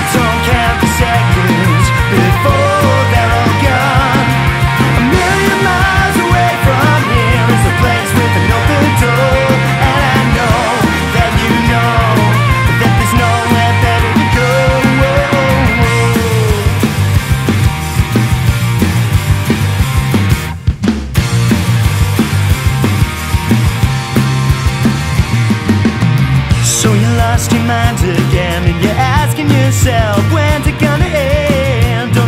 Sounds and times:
Singing: 0.0s - 4.4s, 5.0s - 16.8s
Musical instrument: 0.0s - 20.4s
Punk rock: 0.0s - 32.2s.

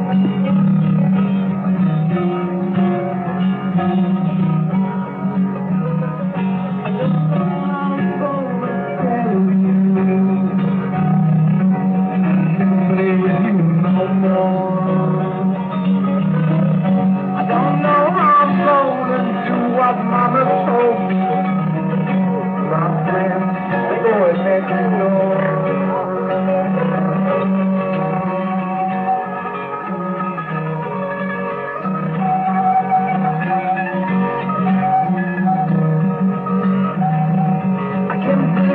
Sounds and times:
Music: 0.0s - 38.7s.

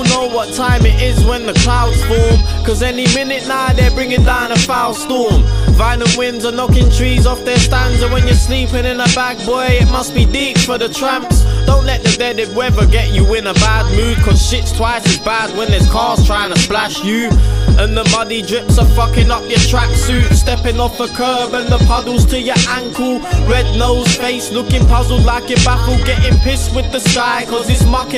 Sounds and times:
Music: 0.0s - 28.1s.

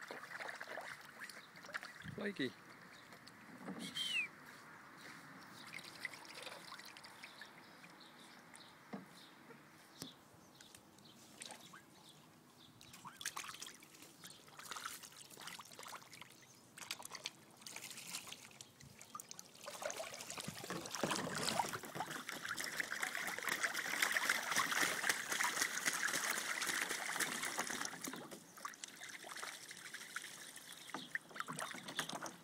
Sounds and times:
Water: 0.0s - 4.3s, 5.0s - 9.1s, 10.7s - 32.4s.

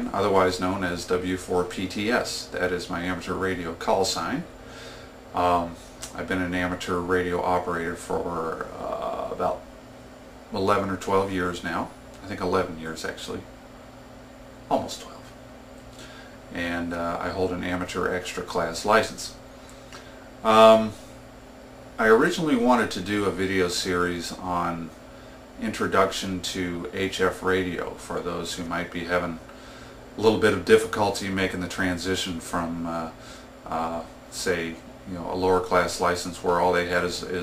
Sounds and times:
Speech: 0.0s - 4.5s, 5.4s - 9.6s, 10.5s - 13.5s, 14.7s - 15.4s, 16.5s - 19.4s, 20.4s - 21.0s, 22.0s - 25.0s, 25.6s - 29.4s, 30.2s - 37.4s.

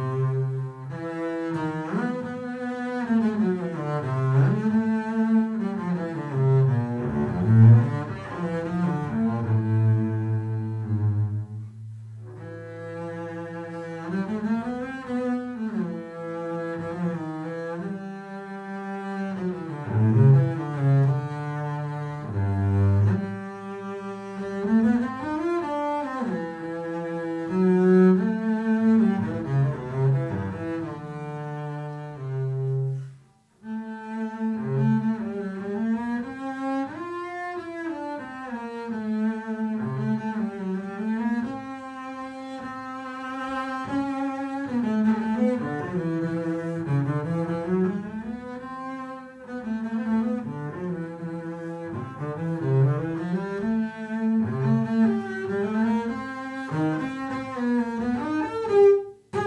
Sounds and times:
Double bass: 0.0s - 59.4s.

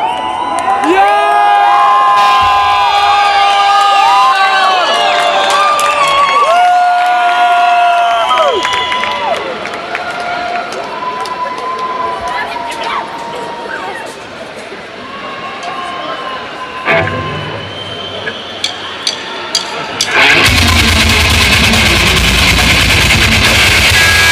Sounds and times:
Cheering: 0.0s - 14.2s, 14.9s - 24.3s.

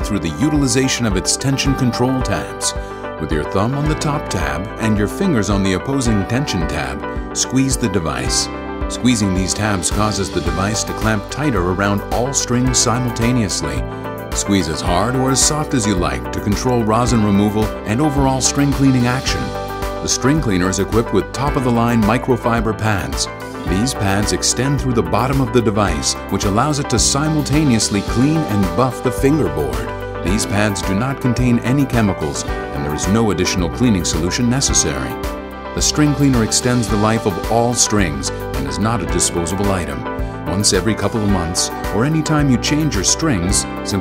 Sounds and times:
Speech: 0.0s - 35.2s, 35.8s - 44.0s
Music: 0.0s - 44.0s.

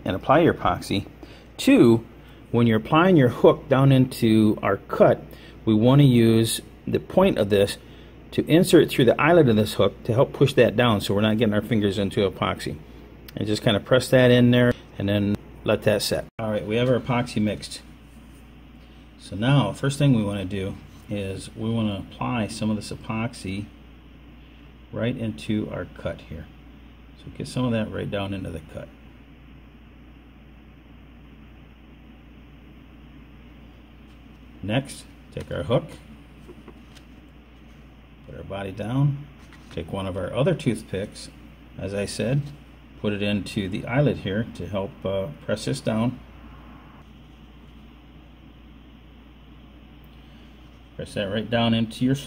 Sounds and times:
Speech: 0.0s - 18.0s, 19.2s - 23.8s, 24.9s - 26.6s, 27.2s - 29.0s, 34.6s - 36.1s, 38.2s - 46.2s, 51.0s - 52.2s.

